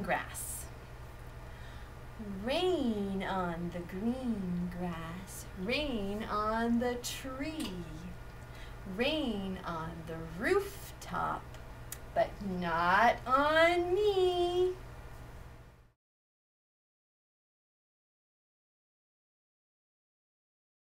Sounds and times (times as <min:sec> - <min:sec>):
Speech: 0:00.0 - 0:00.7, 0:02.2 - 0:08.2, 0:08.9 - 0:11.5, 0:12.1 - 0:14.8.